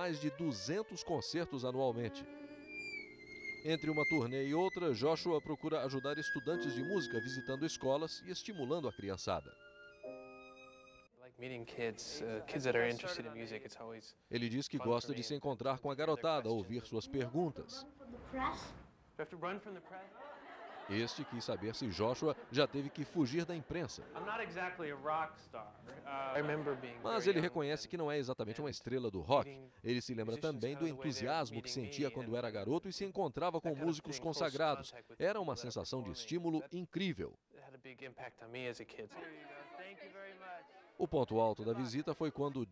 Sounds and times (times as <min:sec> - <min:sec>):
Speech: 0:00.0 - 0:02.2, 0:03.7 - 0:09.5, 0:11.2 - 0:17.8, 0:18.4 - 0:20.2, 0:20.8 - 0:42.7.